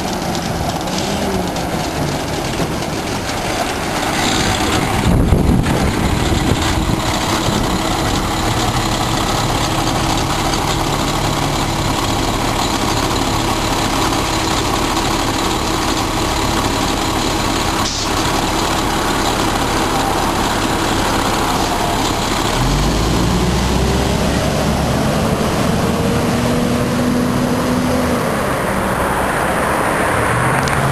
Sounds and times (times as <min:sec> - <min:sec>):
Bus: 0:00.0 - 0:30.9.